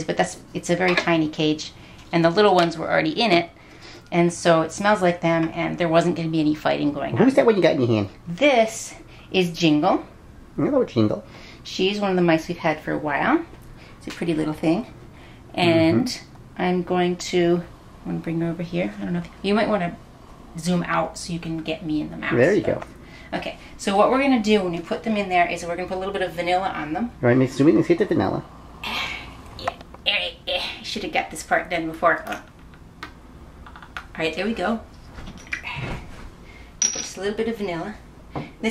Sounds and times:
Speech: 15.6 - 16.2, 22.2 - 22.8.

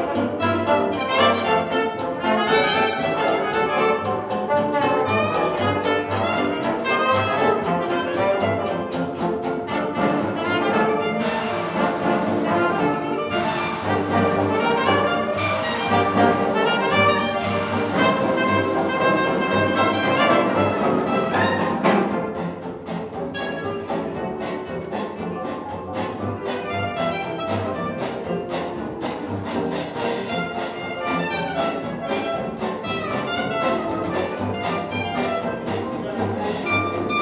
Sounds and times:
Clarinet: 0.0 - 37.2
Trombone: 0.0 - 37.2
Trumpet: 0.0 - 37.2.

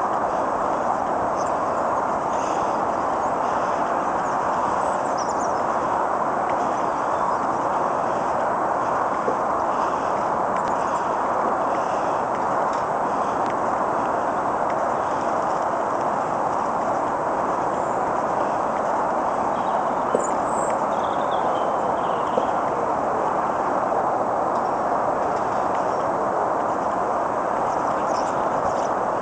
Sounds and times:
Wind: 0.0 - 29.2
Bird: 1.4 - 5.9, 19.5 - 22.7, 27.6 - 29.0.

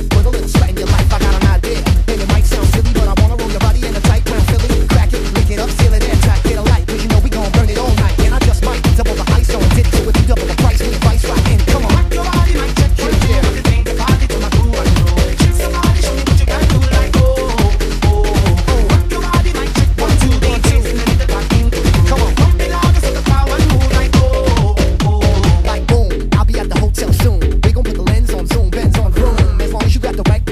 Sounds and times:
Music: 0.0 - 30.5.

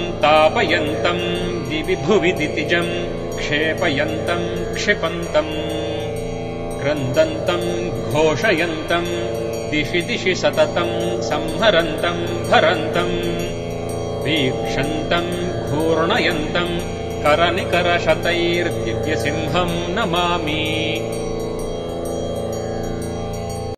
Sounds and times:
Mantra: 0.0 - 5.9, 6.8 - 13.5, 14.2 - 21.1.

